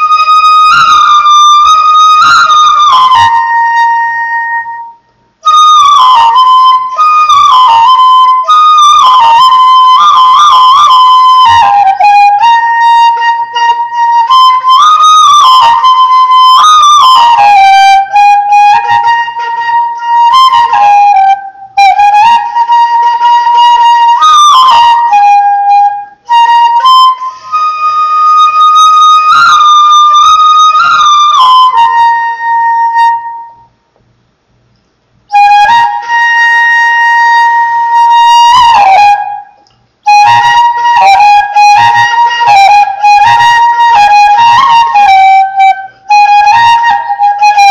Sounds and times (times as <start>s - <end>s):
Flute: 0.0s - 33.8s, 35.3s - 47.7s.